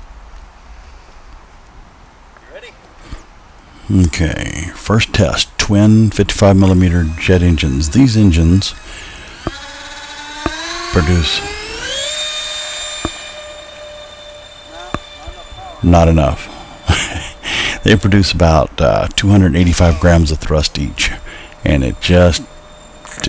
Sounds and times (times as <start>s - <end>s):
Speech: 2.4s - 2.8s, 3.9s - 8.8s, 10.9s - 11.5s, 14.7s - 16.5s, 17.8s - 22.5s
Fixed-wing aircraft, airplane: 6.3s - 23.2s.